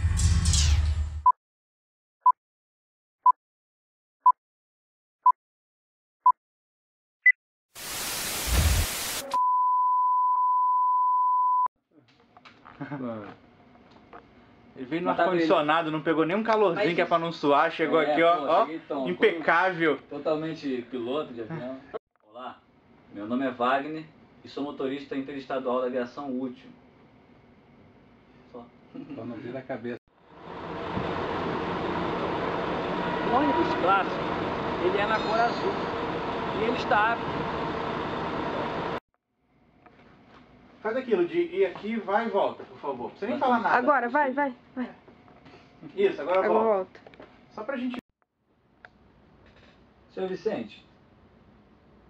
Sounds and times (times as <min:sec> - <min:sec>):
Speech: 0:14.8 - 0:26.8, 0:33.3 - 0:34.2, 0:34.8 - 0:35.8, 0:36.6 - 0:37.2, 0:40.9 - 0:44.1, 0:50.2 - 0:50.9.